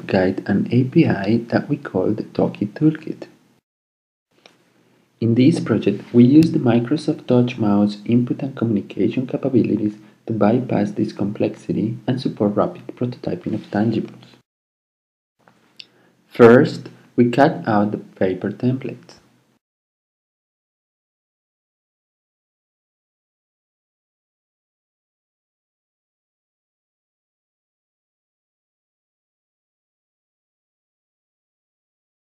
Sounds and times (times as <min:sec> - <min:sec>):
Speech: 0:00.0 - 0:03.4, 0:05.2 - 0:14.4, 0:16.3 - 0:19.3.